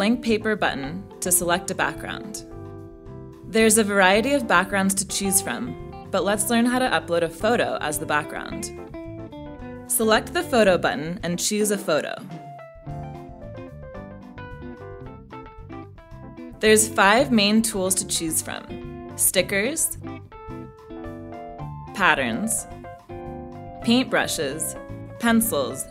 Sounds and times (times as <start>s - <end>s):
Speech: 0.0s - 2.4s, 3.5s - 8.7s, 9.9s - 12.3s, 16.6s - 20.0s, 22.0s - 22.6s, 23.8s - 25.9s
Music: 0.0s - 25.9s.